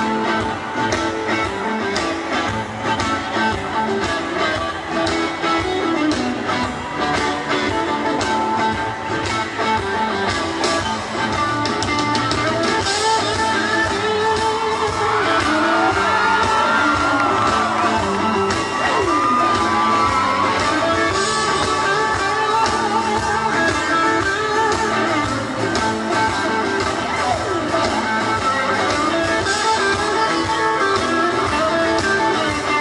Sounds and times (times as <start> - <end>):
Music: 0.0 - 32.8.